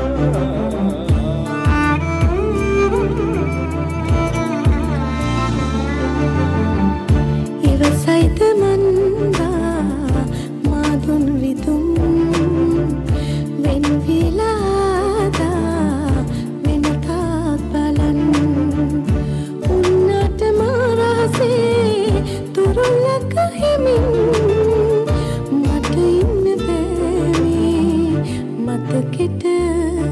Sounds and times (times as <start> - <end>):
Music: 0.0 - 30.1.